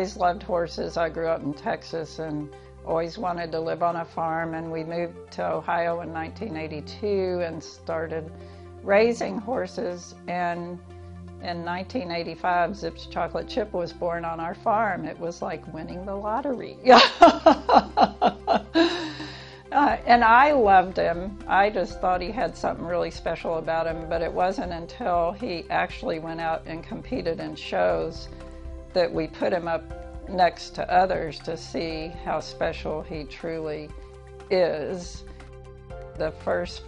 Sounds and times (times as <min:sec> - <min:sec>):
Speech: 0:00.0 - 0:08.3, 0:08.9 - 0:10.8, 0:11.4 - 0:18.7, 0:19.8 - 0:28.3, 0:29.0 - 0:33.9, 0:34.5 - 0:35.2, 0:36.2 - 0:36.8
Music: 0:00.0 - 0:36.8.